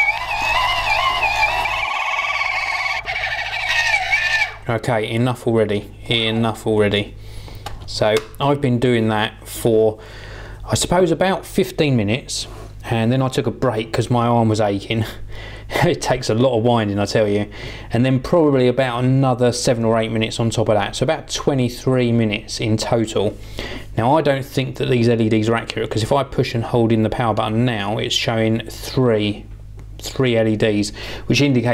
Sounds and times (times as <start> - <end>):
Speech: 4.7 - 7.2, 7.9 - 10.0, 10.7 - 23.4, 24.0 - 31.7.